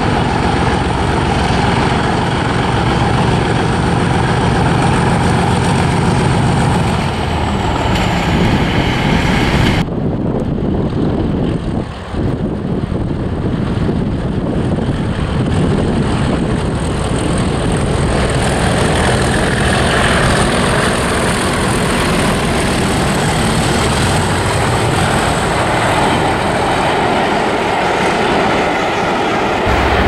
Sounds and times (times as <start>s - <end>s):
Railroad car, train wagon: 0.0s - 30.0s
Train: 0.0s - 30.0s.